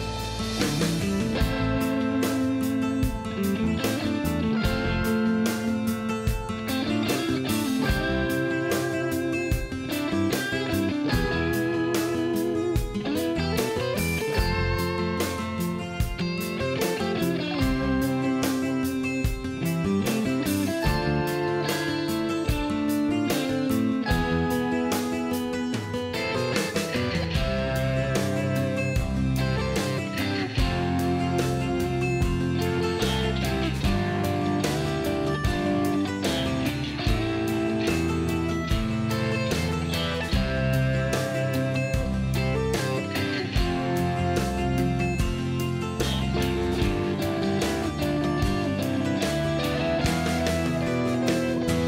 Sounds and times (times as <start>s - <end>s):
Music: 0.0s - 51.8s.